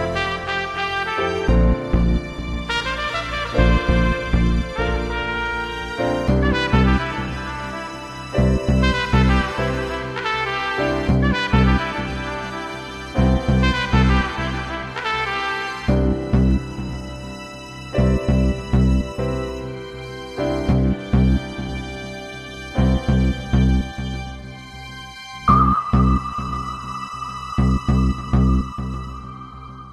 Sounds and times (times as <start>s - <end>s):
Background music: 0.0s - 29.9s.